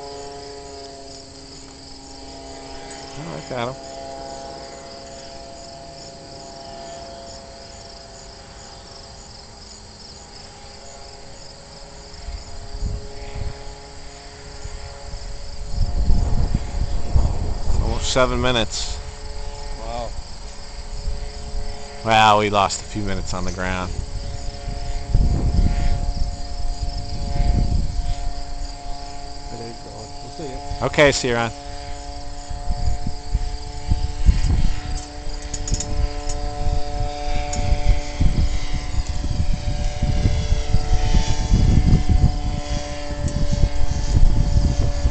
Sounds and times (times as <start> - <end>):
Fixed-wing aircraft, airplane: 0.0 - 45.1.